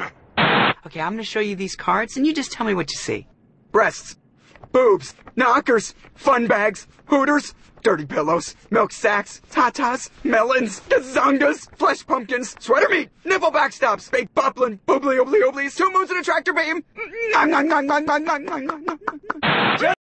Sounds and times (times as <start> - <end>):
Speech: 0.8 - 19.2, 19.8 - 20.0.